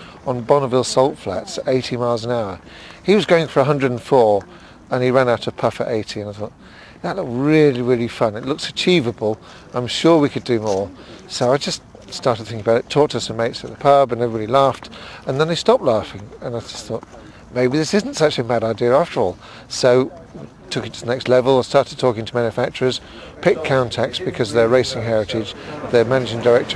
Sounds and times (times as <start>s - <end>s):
Speech: 0.0s - 26.7s.